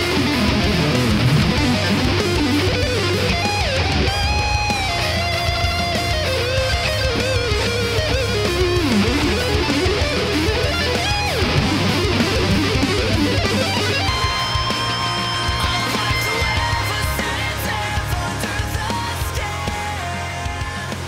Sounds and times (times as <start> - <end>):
Strum: 0.0 - 18.1
Electric guitar: 0.0 - 21.0.